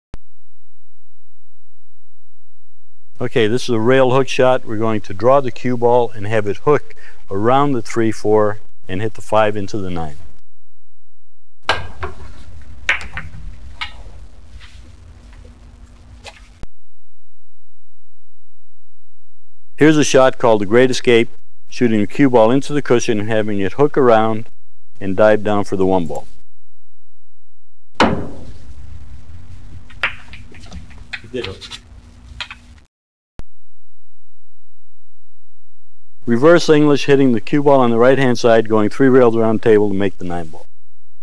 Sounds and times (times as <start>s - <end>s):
Speech: 3.2s - 10.2s, 19.8s - 24.4s, 25.0s - 26.3s, 31.3s - 31.7s, 36.3s - 40.6s.